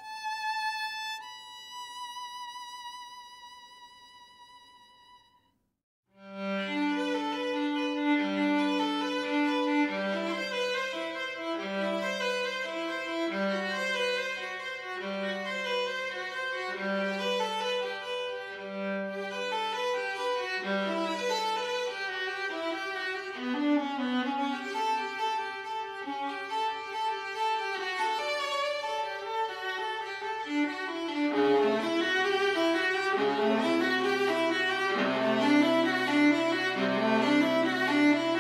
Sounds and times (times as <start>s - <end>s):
Music: 0.0s - 38.4s.